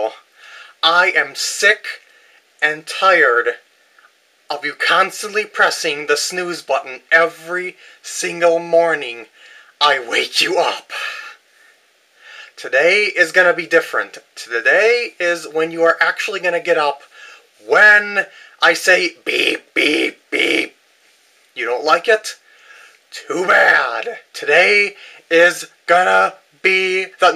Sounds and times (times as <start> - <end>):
Speech: 0.0 - 0.2, 0.8 - 2.0, 2.6 - 3.6, 4.5 - 11.4, 12.6 - 20.8, 21.6 - 22.4, 23.1 - 27.3.